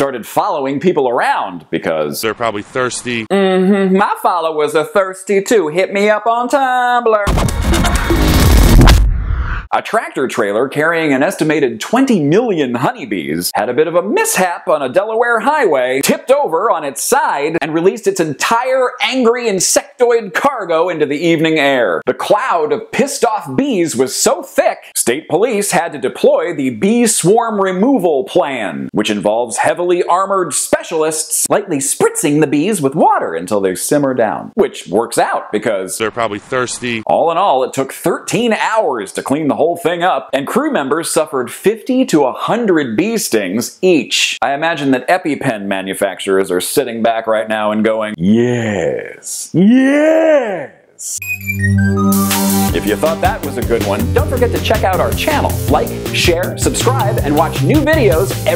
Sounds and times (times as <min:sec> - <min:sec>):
Speech: 0:00.0 - 0:07.3, 0:09.7 - 0:51.2, 0:52.7 - 0:58.5.